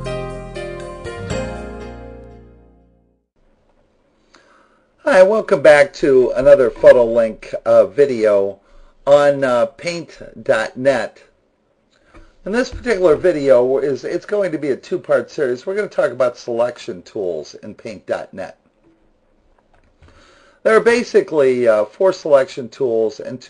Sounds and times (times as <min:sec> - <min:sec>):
Speech: 0:05.0 - 0:11.3, 0:12.4 - 0:18.6, 0:20.6 - 0:23.5.